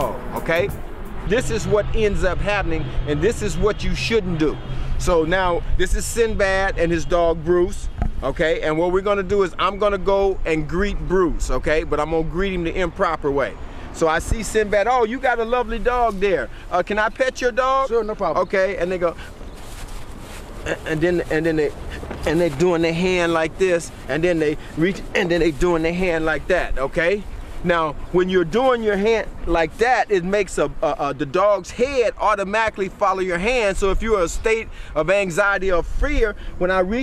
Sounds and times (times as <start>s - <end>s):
Speech: 0.0s - 19.2s, 20.7s - 37.0s.